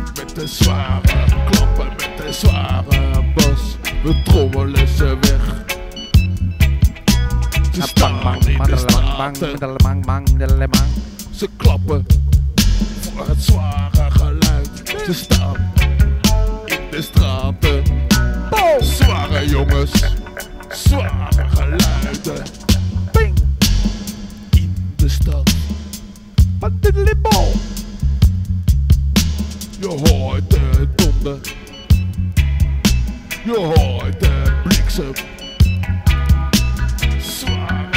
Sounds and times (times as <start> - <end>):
Music: 0.0 - 37.9.